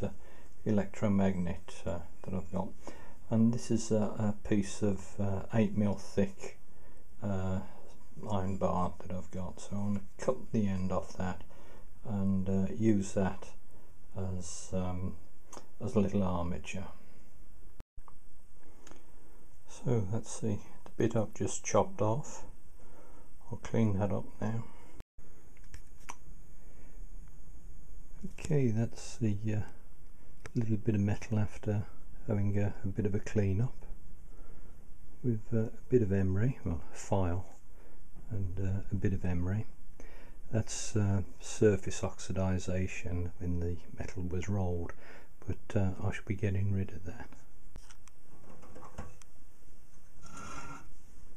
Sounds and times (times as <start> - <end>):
Speech: 0.0 - 6.6, 7.2 - 13.6, 14.2 - 15.2, 15.8 - 17.0, 19.7 - 22.5, 23.4 - 24.8, 28.2 - 29.8, 30.5 - 33.9, 35.2 - 37.6, 38.3 - 39.8, 40.5 - 47.4.